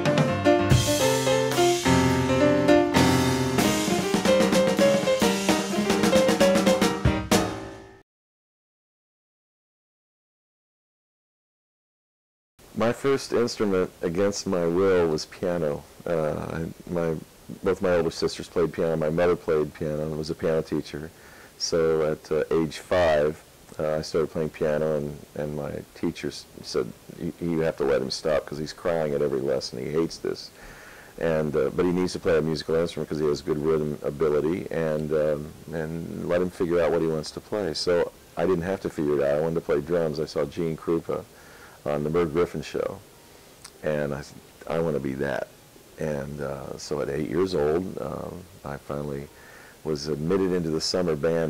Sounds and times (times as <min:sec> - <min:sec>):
Speech: 0:12.8 - 0:30.5, 0:31.2 - 0:43.0, 0:43.7 - 0:51.5.